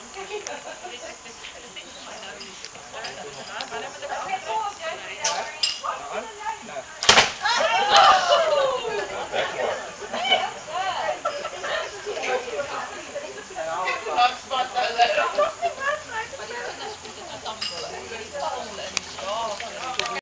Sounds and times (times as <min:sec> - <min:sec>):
Speech: 0:12.0 - 0:20.2.